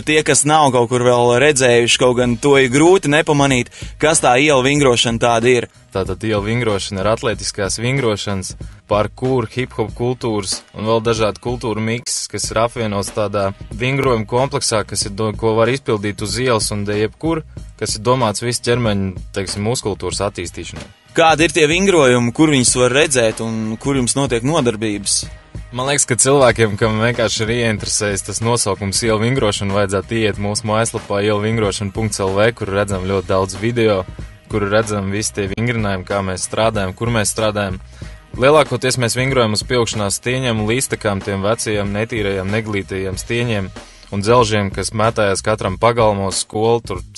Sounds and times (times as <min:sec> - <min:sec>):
Music: 0:00.0 - 0:47.1
Speech: 0:00.0 - 0:47.1.